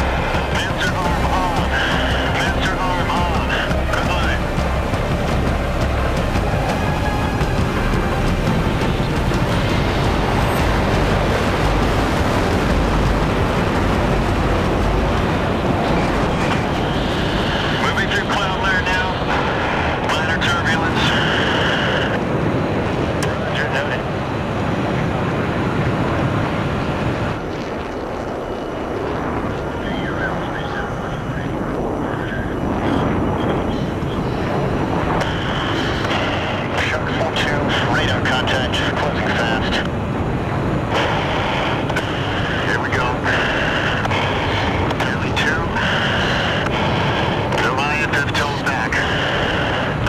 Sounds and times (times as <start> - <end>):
Music: 0.0 - 20.1
Outside, rural or natural: 0.0 - 50.0
Speech: 0.5 - 4.4, 17.8 - 19.3, 20.0 - 22.2, 23.2 - 24.1, 29.5 - 34.3, 36.7 - 39.9, 42.6 - 44.0, 44.9 - 46.4, 47.5 - 49.3.